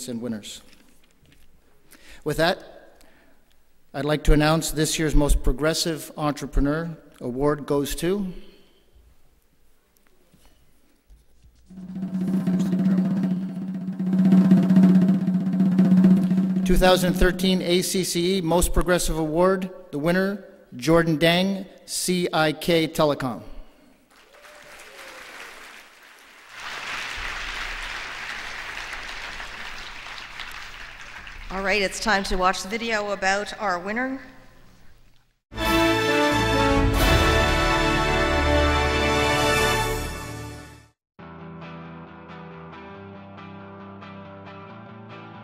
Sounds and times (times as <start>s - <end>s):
Drum roll: 11.7s - 18.0s, 25.9s - 31.8s, 35.6s - 38.7s.